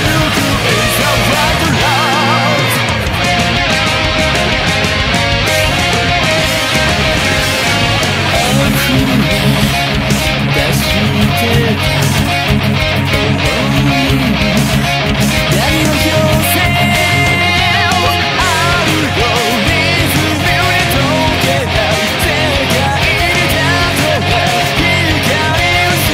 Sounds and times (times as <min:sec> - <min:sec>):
Electric guitar: 0:00.0 - 0:26.1.